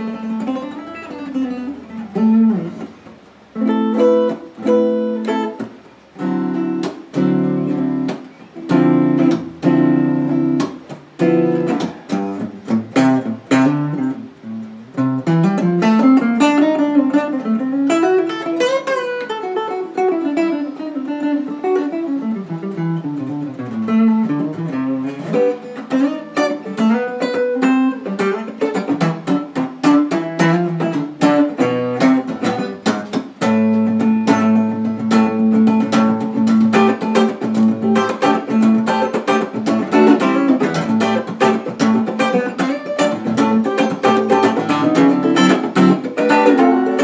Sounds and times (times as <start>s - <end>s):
Acoustic guitar: 0.0s - 47.0s.